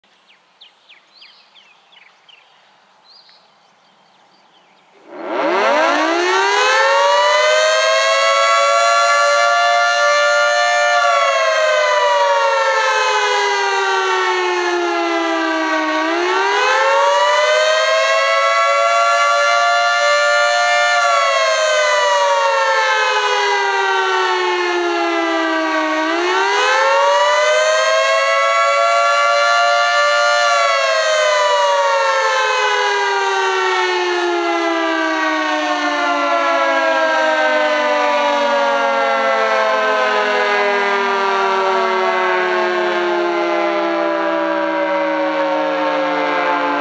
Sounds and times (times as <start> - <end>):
Civil defense siren: 5.0 - 46.8.